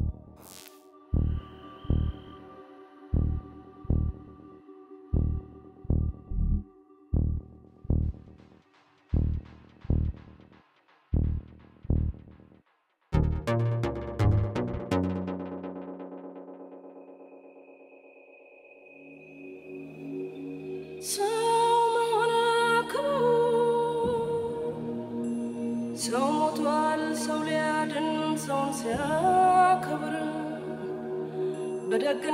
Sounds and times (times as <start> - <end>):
Music: 0.0 - 32.3.